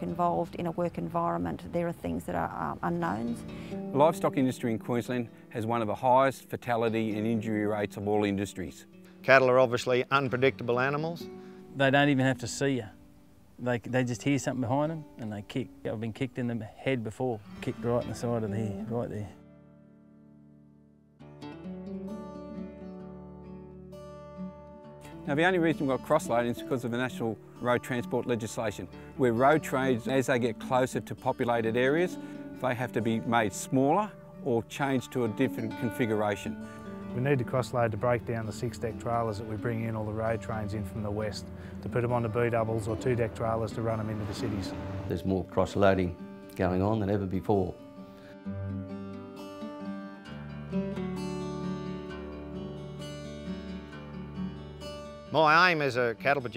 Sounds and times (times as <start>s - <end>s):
Music: 0.0s - 56.5s
Speech: 3.9s - 11.2s, 11.8s - 13.0s, 13.6s - 19.4s, 25.3s - 36.6s, 37.2s - 47.8s, 55.3s - 56.5s.